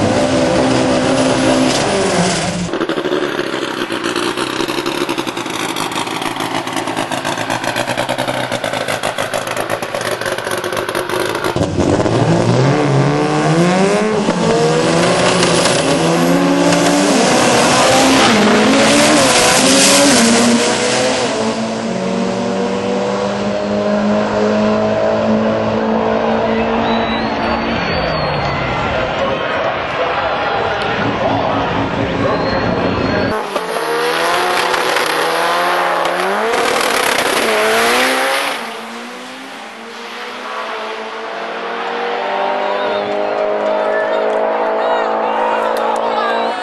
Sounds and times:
Race car, auto racing: 0.0 - 46.6
Speech: 28.9 - 33.4, 42.8 - 46.6.

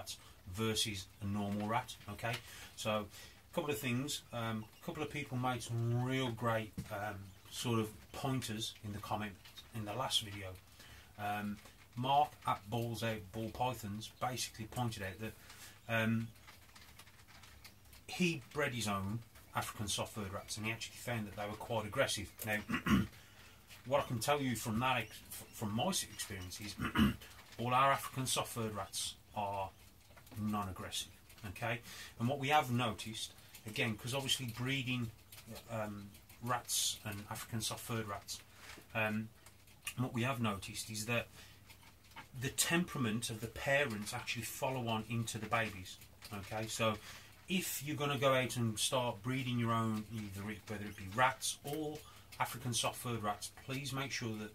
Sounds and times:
Speech: 0.0 - 10.6, 11.2 - 16.4, 18.1 - 23.1, 23.8 - 39.3, 39.9 - 41.3, 42.3 - 54.5.

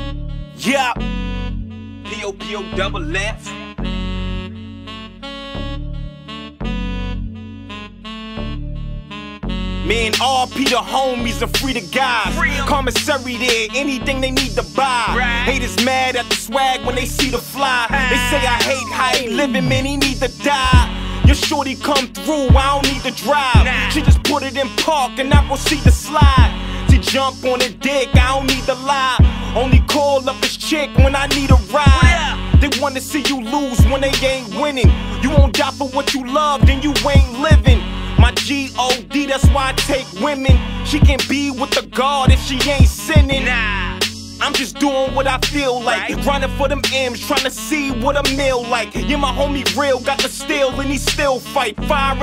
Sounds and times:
Music: 0.0 - 52.2.

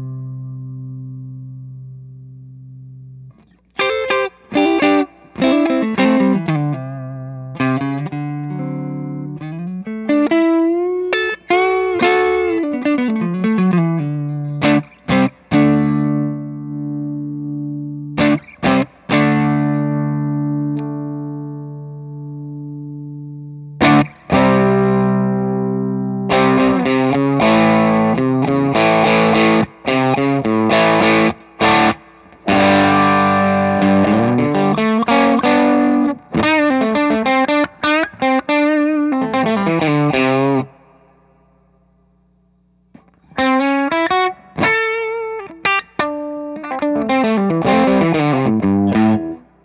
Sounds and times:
Effects unit: 0.0 - 49.6
Guitar: 0.0 - 49.6
Inside, small room: 0.0 - 49.6.

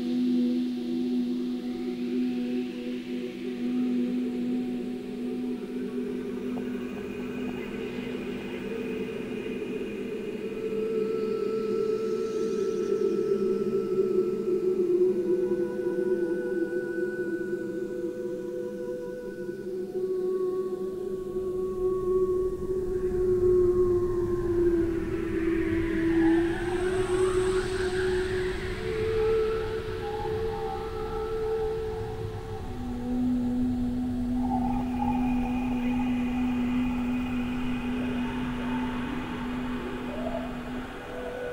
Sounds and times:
Ambient music: 0.0 - 41.5.

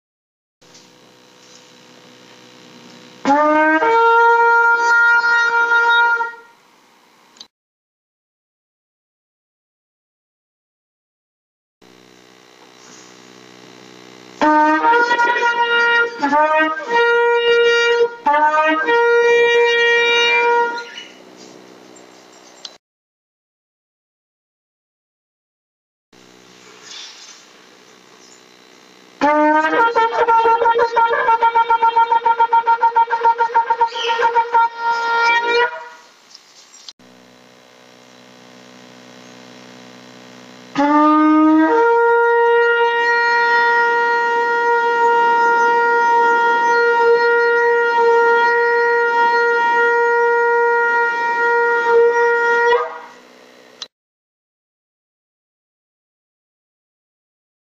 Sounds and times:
Shofar: 3.2 - 6.6, 14.4 - 21.5, 29.2 - 36.1, 37.8 - 53.2.

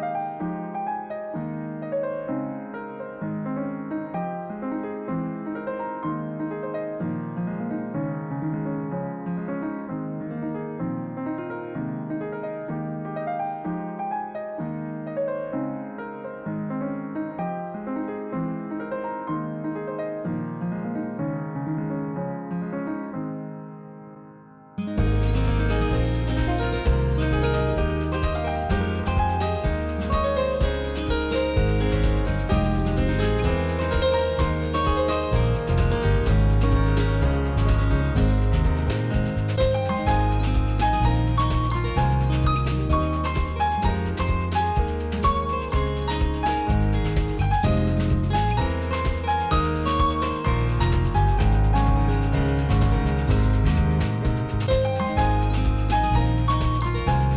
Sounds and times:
Music: 0.0 - 57.3.

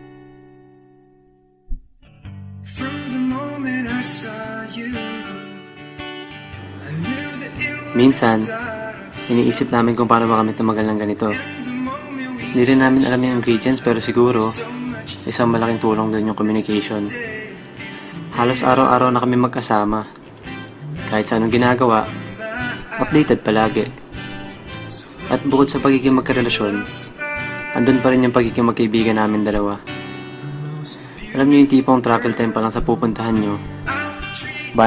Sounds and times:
Speech: 8.0 - 8.6, 9.3 - 11.4, 12.5 - 17.2, 18.4 - 20.2, 21.0 - 22.2, 23.0 - 24.0, 24.9 - 26.9, 27.8 - 29.8, 30.8 - 33.6.

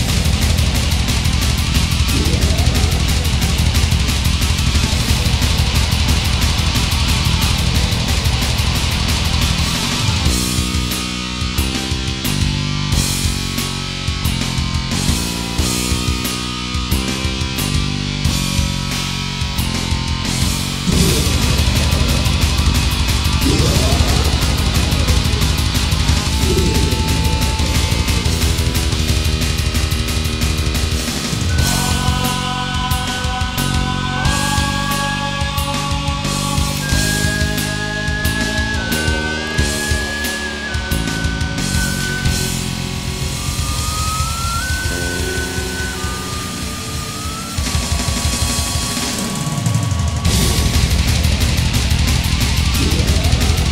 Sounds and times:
Video game music: 0.0 - 53.7.

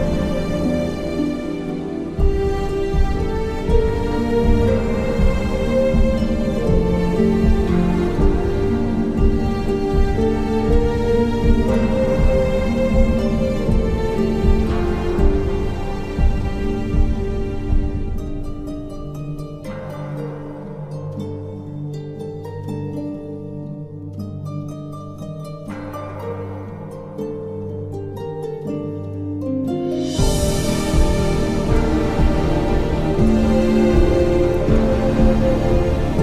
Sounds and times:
Music: 0.0 - 36.2.

